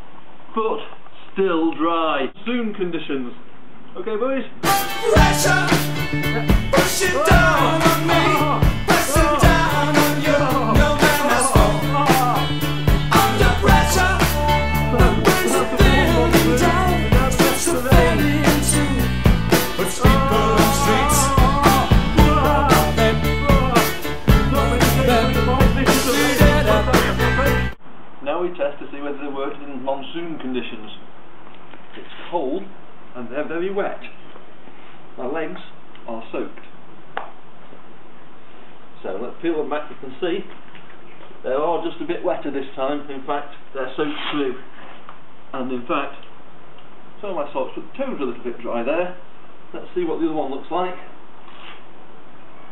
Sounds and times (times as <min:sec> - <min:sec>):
Ska: 0:04.6 - 0:27.8.